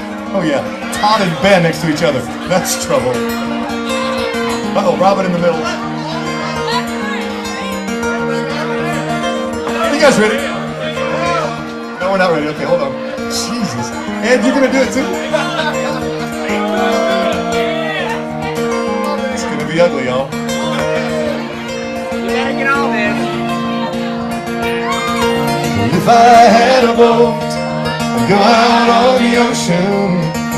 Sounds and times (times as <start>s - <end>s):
Music: 0.0s - 30.5s.